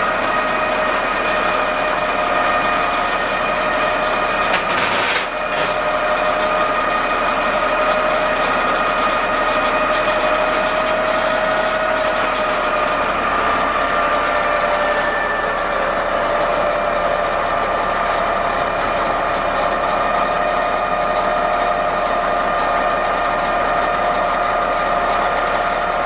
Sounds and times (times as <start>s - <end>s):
Heavy engine (low frequency): 0.0s - 26.0s.